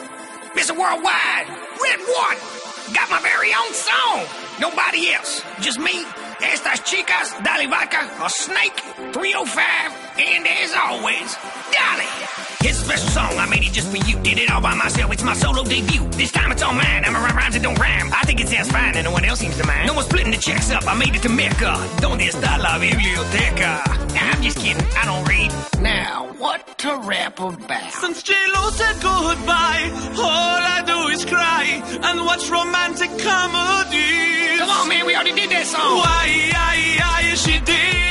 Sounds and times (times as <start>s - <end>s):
Music: 0.0s - 38.1s.